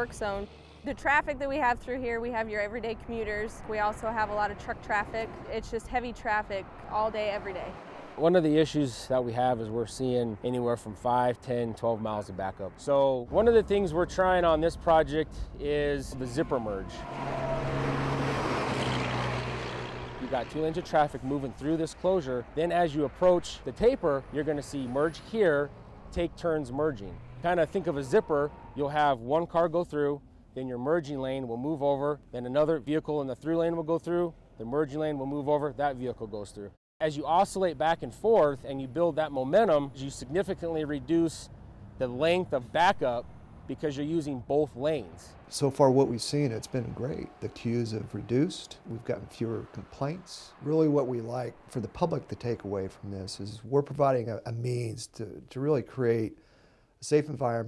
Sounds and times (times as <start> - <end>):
Speech: 0.0 - 16.9, 20.2 - 56.4, 57.0 - 57.6.